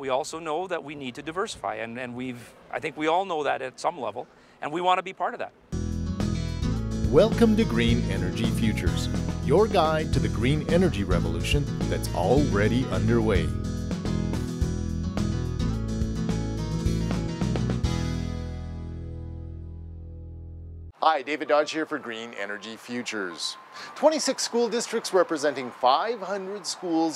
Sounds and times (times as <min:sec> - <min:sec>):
Speech: 0:00.0 - 0:05.6, 0:07.1 - 0:13.5, 0:21.0 - 0:27.1
Music: 0:05.7 - 0:21.0.